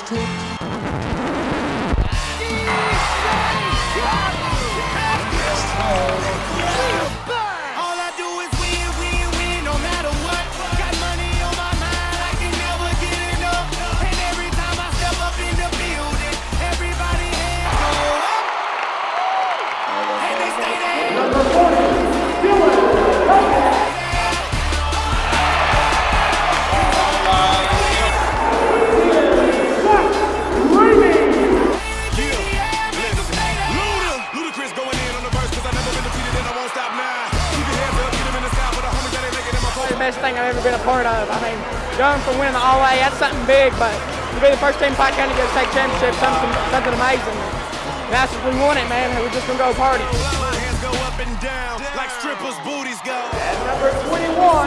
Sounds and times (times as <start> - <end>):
Music: 0.0 - 18.9, 19.6 - 54.6.